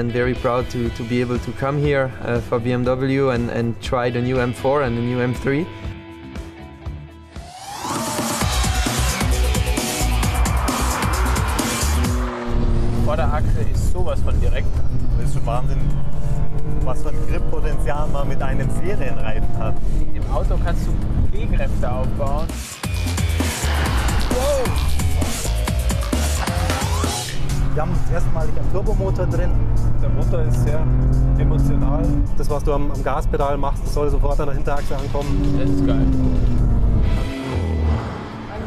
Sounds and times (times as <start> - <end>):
Speech: 0.0 - 5.7, 13.0 - 14.6, 15.2 - 15.9, 16.8 - 22.5, 27.8 - 36.3
Music: 0.0 - 38.6
Car: 10.9 - 22.5, 26.7 - 38.6.